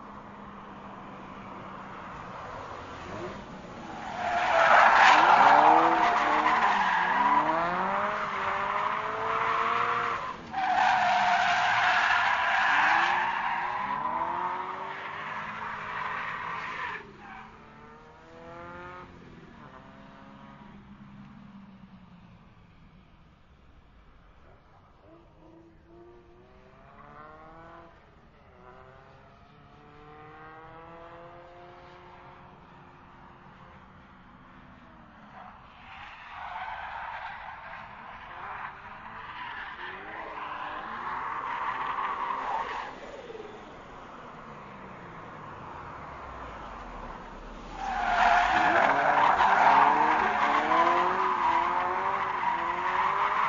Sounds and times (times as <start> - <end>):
Skidding: 0.0 - 53.4.